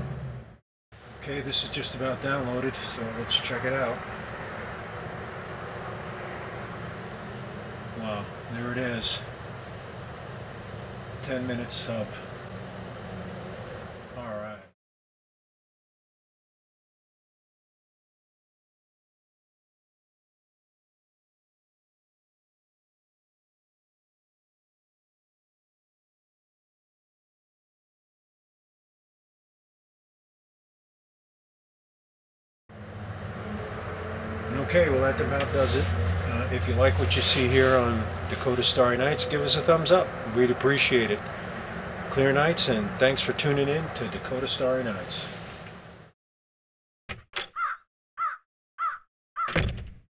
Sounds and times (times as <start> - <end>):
Speech: 1.2 - 4.0, 8.0 - 9.3, 11.2 - 12.3, 14.1 - 14.8, 34.5 - 41.3, 42.1 - 45.4.